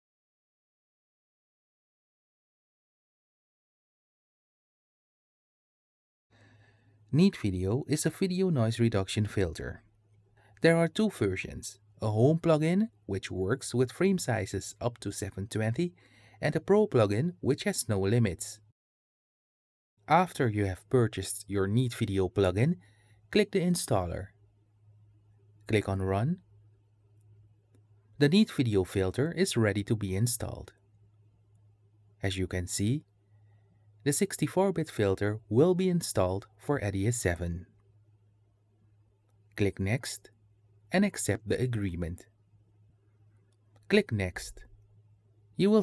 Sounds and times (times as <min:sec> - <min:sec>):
Speech: 0:07.1 - 0:09.8, 0:10.6 - 0:18.7, 0:20.1 - 0:24.4, 0:25.7 - 0:26.5, 0:28.2 - 0:30.8, 0:32.2 - 0:33.1, 0:34.0 - 0:37.7, 0:39.6 - 0:40.3, 0:40.9 - 0:42.3, 0:43.9 - 0:44.7, 0:45.6 - 0:45.8.